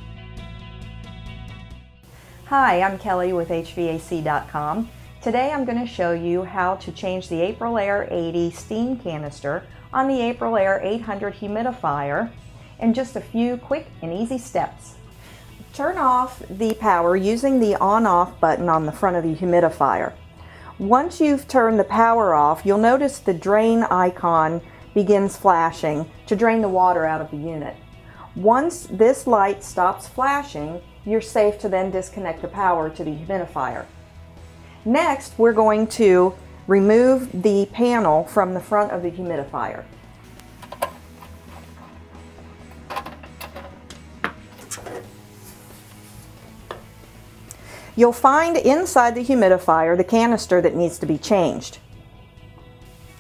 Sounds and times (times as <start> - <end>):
Music: 0.0 - 53.2
Speech: 2.5 - 14.9, 15.8 - 20.2, 20.8 - 27.8, 28.4 - 33.9, 34.9 - 39.9, 48.0 - 51.8.